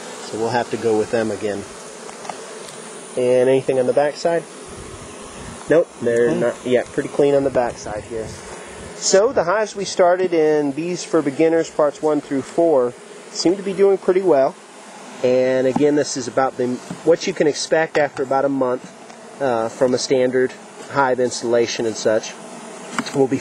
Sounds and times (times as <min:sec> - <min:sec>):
Bee, wasp, etc.: 0:00.0 - 0:23.4
Fly, housefly: 0:00.0 - 0:23.4.